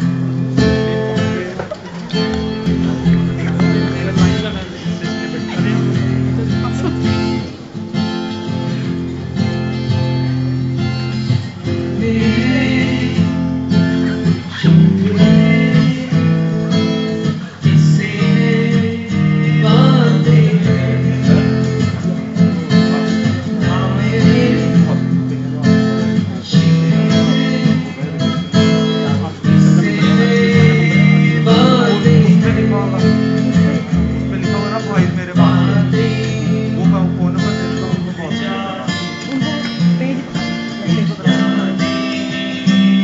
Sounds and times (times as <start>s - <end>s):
Music: 0.0s - 43.0s
Speech: 1.0s - 7.6s, 19.4s - 43.0s
Male singing: 11.8s - 13.5s, 14.6s - 43.0s.